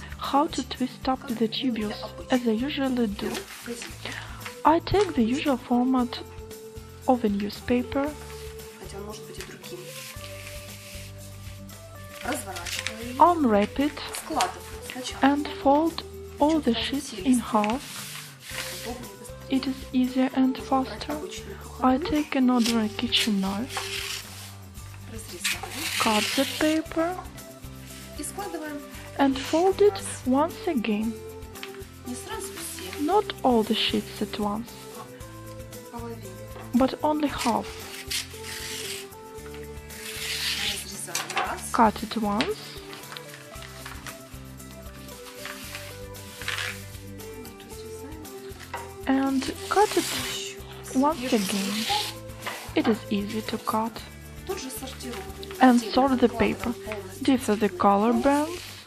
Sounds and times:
Music: 0.0s - 58.8s.

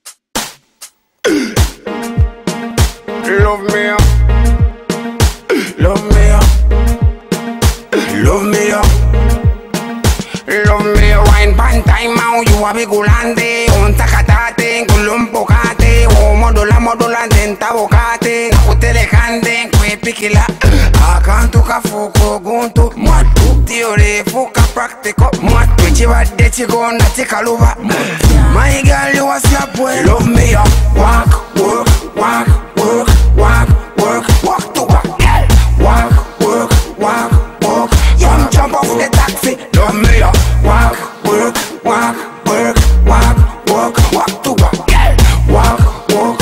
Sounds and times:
Music: 0.0s - 46.4s.

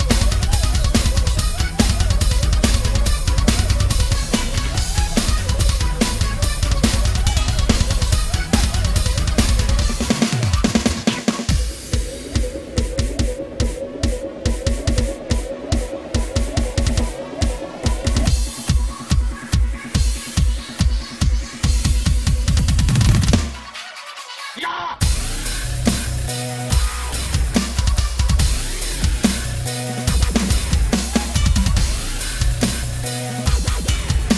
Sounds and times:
Bass drum: 0.0s - 13.4s, 25.0s - 34.3s
Drum roll: 0.0s - 24.4s, 25.0s - 34.3s
Drum kit: 0.0s - 34.3s.

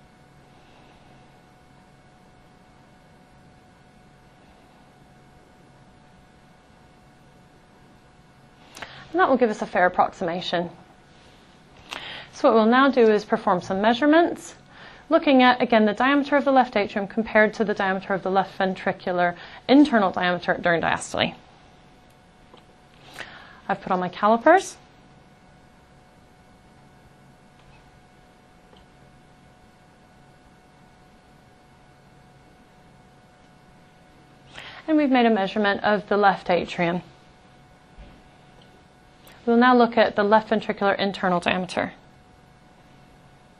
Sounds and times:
Speech: 9.1s - 10.8s, 12.3s - 21.4s, 23.7s - 24.8s, 34.9s - 37.1s, 39.4s - 42.0s.

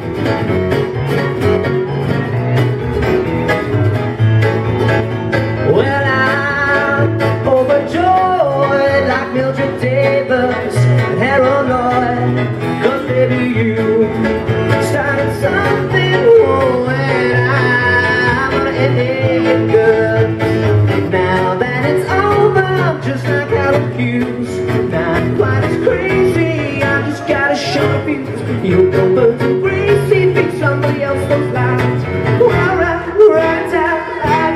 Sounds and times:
Music: 0.0s - 34.5s.

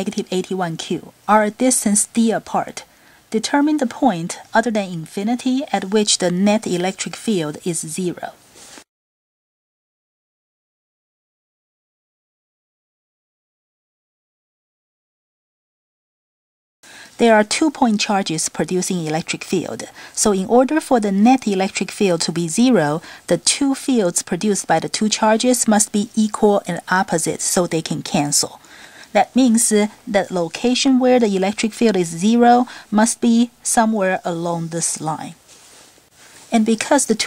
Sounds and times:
Speech: 0.0s - 8.4s, 17.2s - 35.4s, 36.5s - 37.2s.

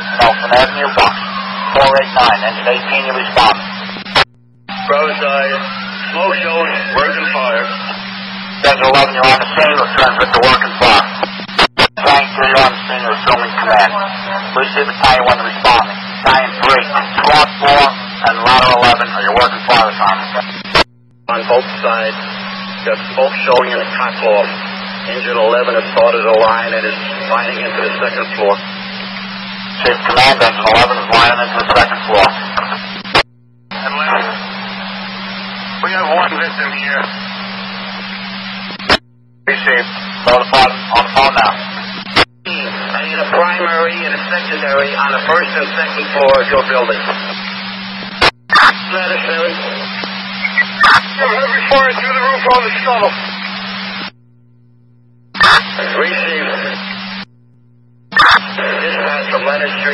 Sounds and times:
Speech: 0.0s - 3.6s, 4.8s - 8.0s, 8.6s - 11.4s, 12.0s - 20.7s, 21.3s - 28.7s, 29.8s - 32.8s, 33.8s - 34.5s, 35.8s - 37.2s, 39.5s - 41.8s, 42.5s - 47.4s, 48.6s - 49.9s, 50.8s - 53.2s, 55.4s - 56.9s, 58.2s - 59.9s.

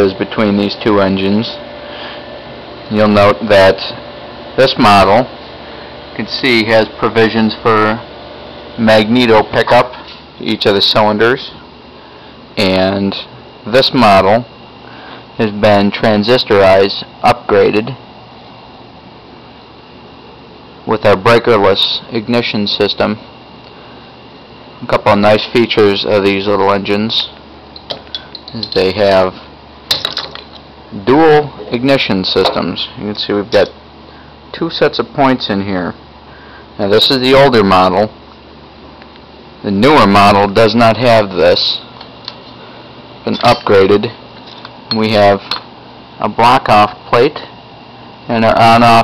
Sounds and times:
Speech: 0.0s - 1.6s, 2.9s - 4.0s, 4.6s - 5.3s, 6.2s - 8.1s, 8.8s - 11.6s, 12.6s - 14.6s, 15.4s - 18.0s, 20.8s - 23.2s, 24.8s - 27.4s, 28.5s - 29.4s, 30.9s - 33.8s, 34.5s - 36.0s, 36.8s - 38.2s, 39.6s - 41.9s, 43.2s - 44.2s, 44.9s - 45.6s, 46.2s - 47.6s, 48.3s - 49.0s.

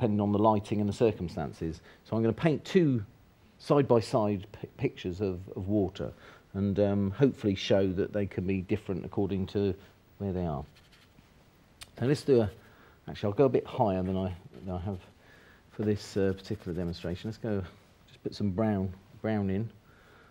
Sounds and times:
Speech: 0.0s - 10.8s, 11.8s - 15.1s, 15.7s - 19.8s.

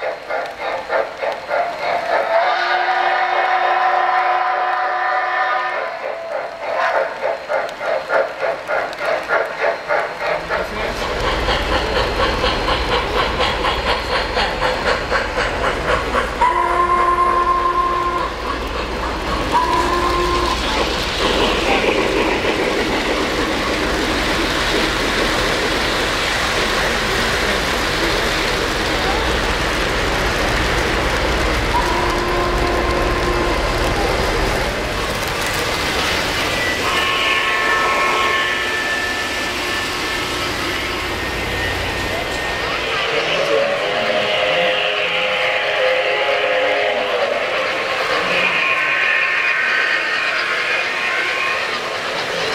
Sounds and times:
Steam whistle: 2.4s - 7.0s, 16.4s - 18.6s, 19.5s - 21.0s, 31.7s - 34.2s, 36.6s - 52.0s.

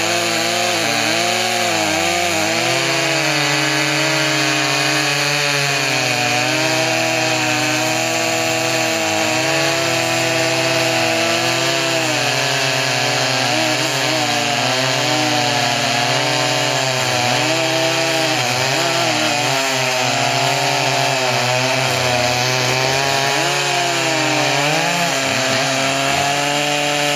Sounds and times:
Chainsaw: 0.0s - 27.1s.

